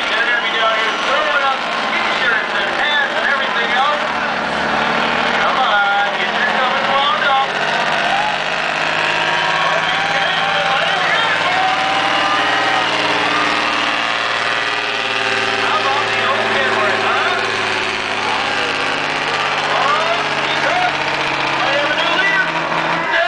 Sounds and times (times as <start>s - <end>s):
Speech: 0.0s - 4.2s, 5.4s - 7.6s, 9.6s - 11.7s, 15.6s - 17.5s, 18.2s - 21.0s, 21.6s - 23.2s
Truck: 0.0s - 23.2s.